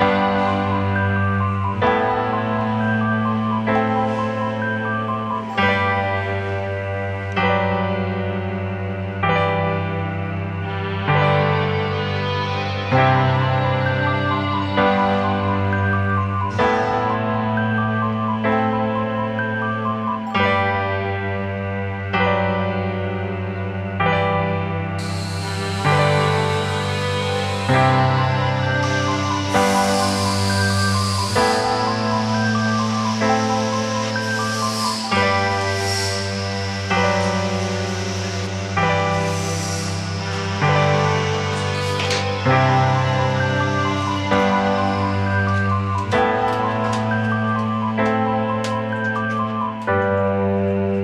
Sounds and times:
Music: 0.0s - 51.0s.

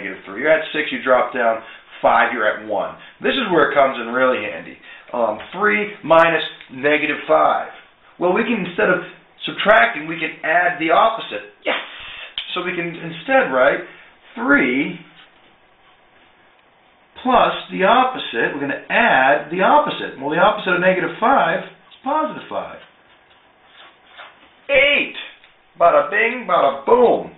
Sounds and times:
Speech: 0.0s - 15.2s, 17.2s - 22.9s, 24.7s - 27.3s.

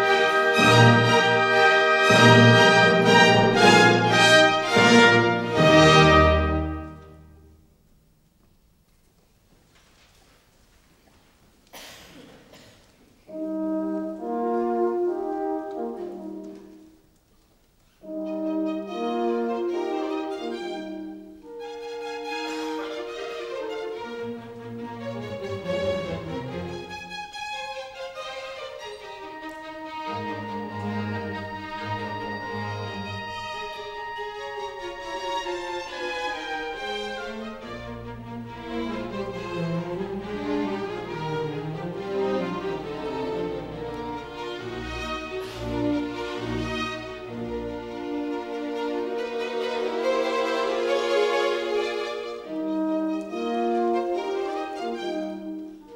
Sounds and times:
Orchestra: 0.0s - 55.9s.

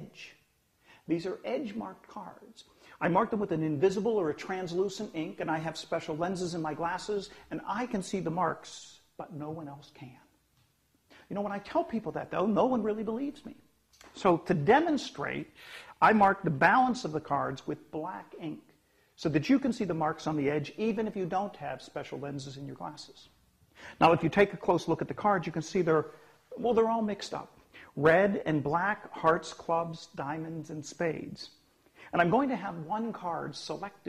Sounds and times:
Speech: 0.0s - 0.4s, 1.1s - 10.3s, 11.2s - 23.4s, 24.0s - 34.0s.

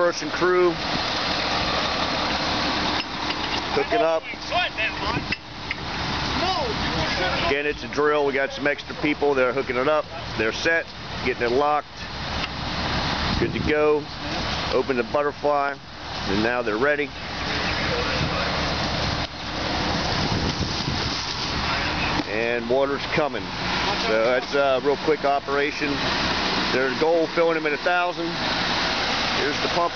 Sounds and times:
Speech: 0.0s - 0.8s, 3.7s - 5.3s, 6.4s - 11.9s, 13.4s - 18.6s, 21.6s - 26.0s, 26.7s - 28.4s, 29.4s - 29.9s.

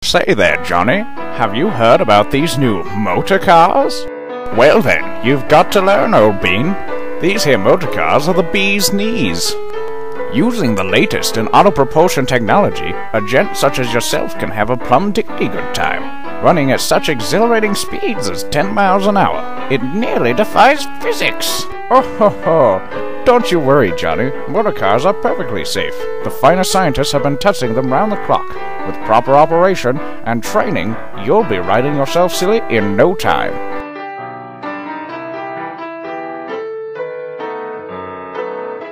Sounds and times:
Speech: 0.0s - 9.6s, 10.3s - 33.6s
Music: 0.0s - 38.9s.

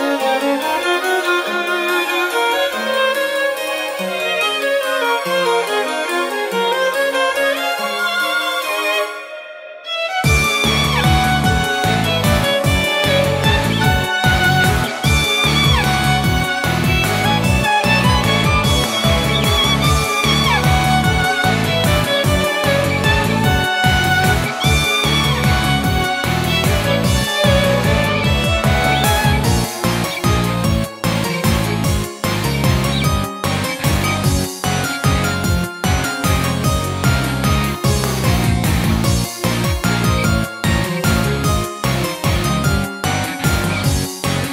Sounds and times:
Violin, fiddle: 0.0s - 44.5s.

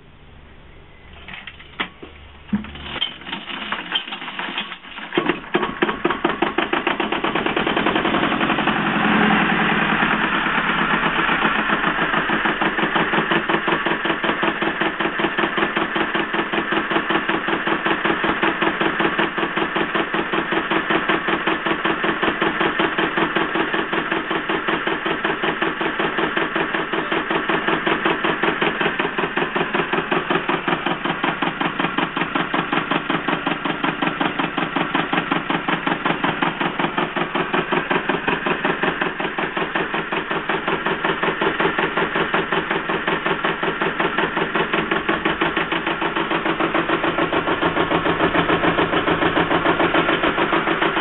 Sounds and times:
Medium engine (mid frequency): 0.0s - 51.0s.

